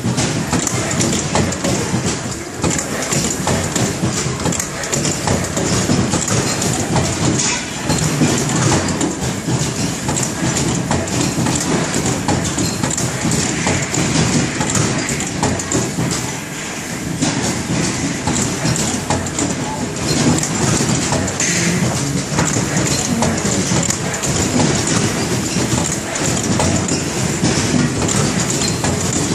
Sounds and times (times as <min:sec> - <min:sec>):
Printer: 0:00.0 - 0:29.3.